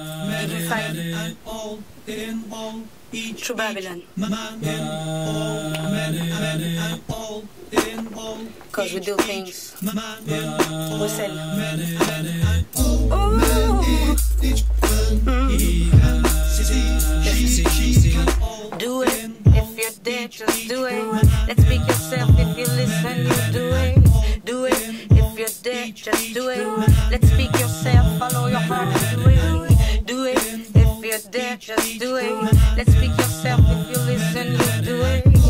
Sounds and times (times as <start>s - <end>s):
Music: 11.9s - 25.6s, 26.2s - 31.2s, 31.8s - 35.5s.